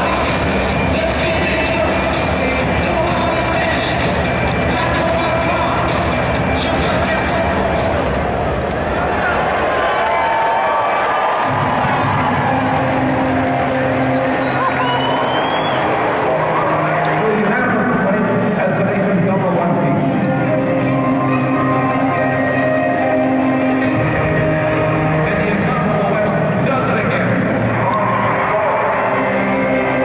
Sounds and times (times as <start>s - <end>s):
Speech: 16.3s - 22.3s, 25.2s - 27.5s.